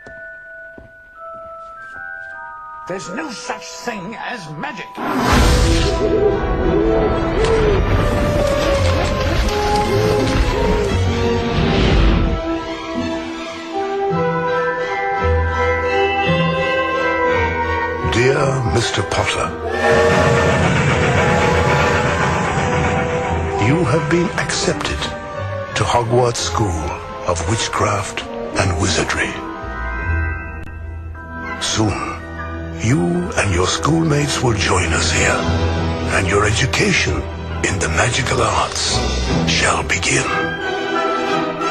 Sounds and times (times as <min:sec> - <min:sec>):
Music: 0:00.0 - 0:41.7
Speech: 0:02.9 - 0:05.0, 0:18.0 - 0:19.6, 0:23.6 - 0:25.2, 0:25.8 - 0:29.4, 0:32.8 - 0:35.5, 0:36.1 - 0:40.4.